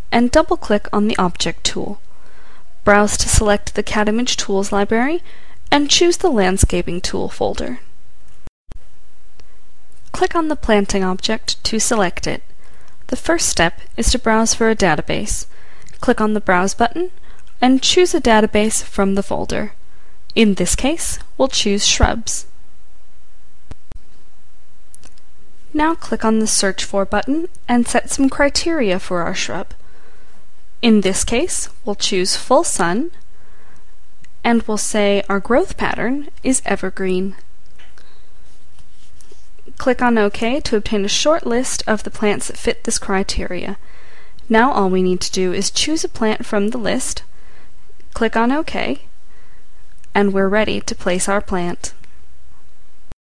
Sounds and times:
Speech: 0.1s - 2.0s, 2.8s - 7.9s, 10.1s - 12.4s, 13.1s - 22.5s, 25.7s - 29.8s, 30.8s - 33.2s, 34.4s - 37.4s, 39.7s - 43.8s, 44.5s - 47.3s, 48.2s - 49.1s, 50.1s - 52.0s.

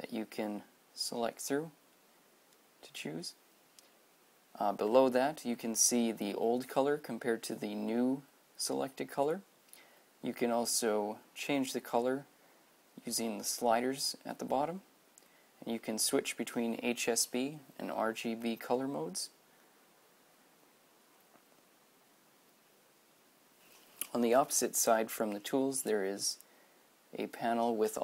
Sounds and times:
Speech: 0.0s - 1.8s, 2.8s - 3.4s, 4.6s - 9.5s, 10.2s - 12.3s, 13.0s - 14.9s, 15.6s - 19.4s, 24.0s - 26.4s, 27.1s - 28.0s.

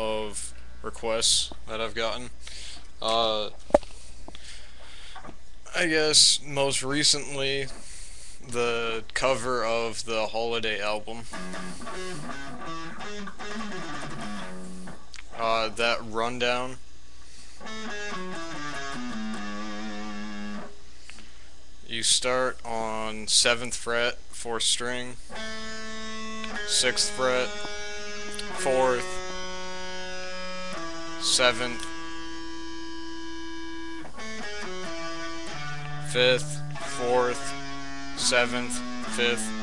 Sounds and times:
Speech: 0.0s - 2.4s, 3.0s - 3.6s, 5.7s - 7.8s, 8.4s - 11.3s, 15.2s - 16.8s, 19.5s - 20.0s, 21.8s - 25.2s, 26.7s - 27.5s, 28.4s - 29.2s, 31.2s - 31.9s, 36.1s - 37.5s, 38.2s - 39.6s
Music: 11.3s - 15.0s, 17.6s - 20.8s, 25.3s - 39.6s.

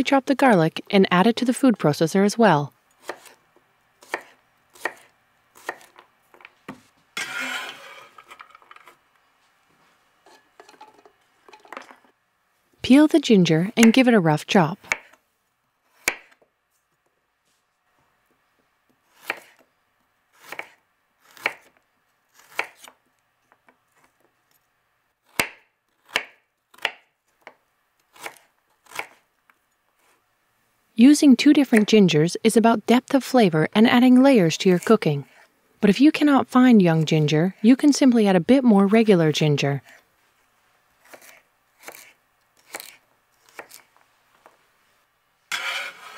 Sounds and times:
Speech: 0.0s - 2.7s, 12.8s - 14.8s, 31.0s - 39.9s.

